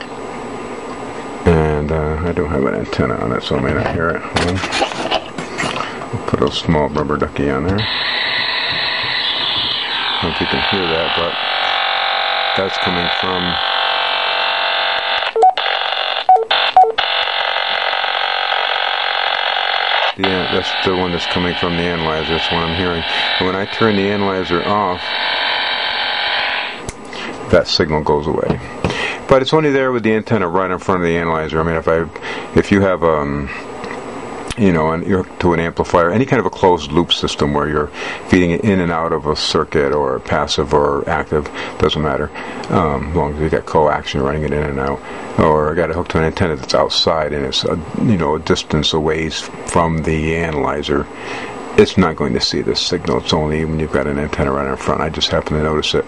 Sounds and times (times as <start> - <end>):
Speech: 1.4 - 4.7, 6.1 - 7.9, 10.2 - 11.4, 12.6 - 13.6, 20.2 - 25.2, 27.5 - 33.7, 34.5 - 51.1, 51.8 - 56.0.